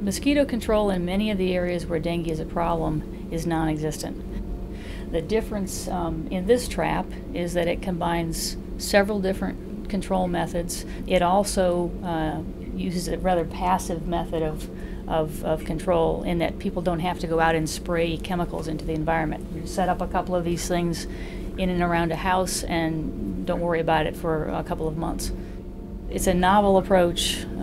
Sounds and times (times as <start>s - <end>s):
Speech: 0.0s - 4.2s, 5.1s - 25.3s, 26.1s - 27.6s.